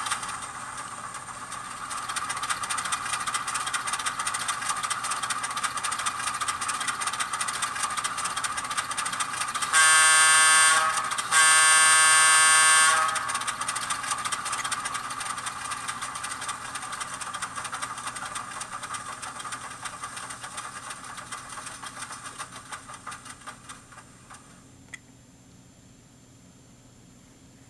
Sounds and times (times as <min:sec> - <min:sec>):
Train: 0:00.0 - 0:24.4.